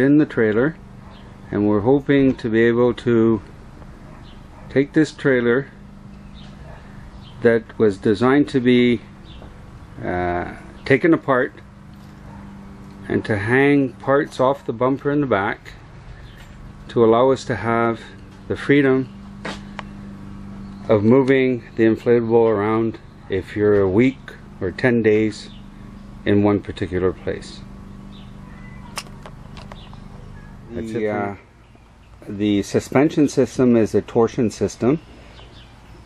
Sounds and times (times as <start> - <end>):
Speech: 0.0 - 0.8, 1.5 - 3.5, 4.7 - 5.8, 7.4 - 9.1, 10.0 - 11.6, 13.1 - 15.8, 16.9 - 19.1, 20.9 - 25.5, 26.3 - 27.7, 30.7 - 31.5, 32.2 - 35.0.